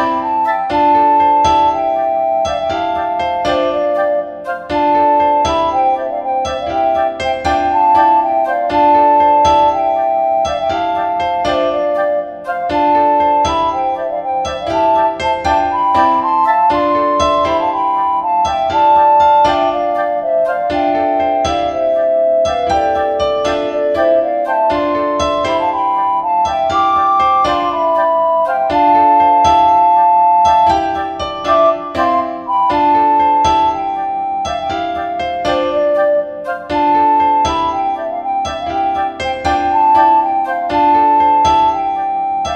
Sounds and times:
Electric piano: 0:00.0 - 0:42.5.

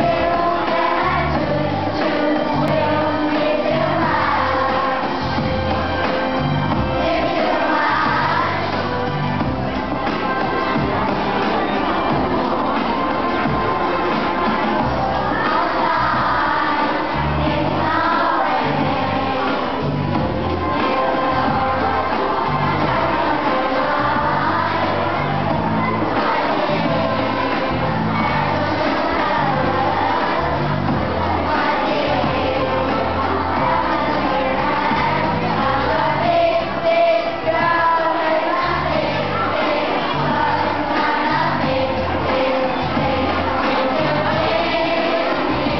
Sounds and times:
Child singing: 0:00.0 - 0:45.7
Choir: 0:00.0 - 0:45.7.

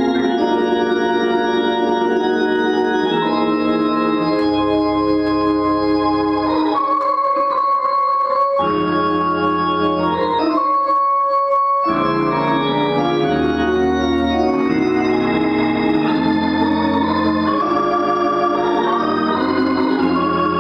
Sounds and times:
Hammond organ: 0:00.0 - 0:20.6.

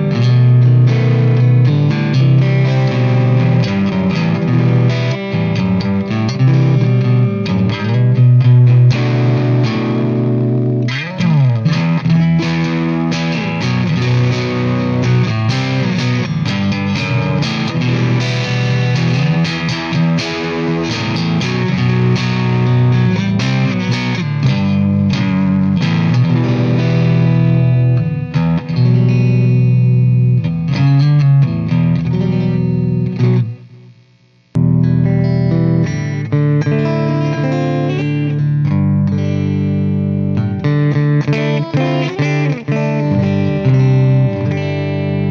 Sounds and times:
Acoustic guitar: 0:00.0 - 0:33.8, 0:34.5 - 0:45.3
Bass guitar: 0:00.0 - 0:45.3
Electric guitar: 0:00.0 - 0:45.3
Strum: 0:00.0 - 0:45.3.

